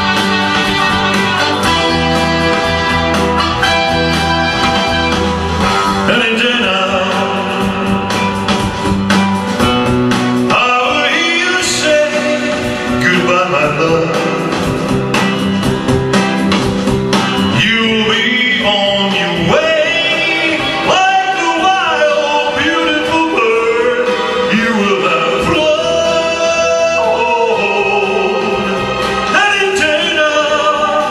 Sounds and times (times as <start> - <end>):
Music: 0.0 - 31.1.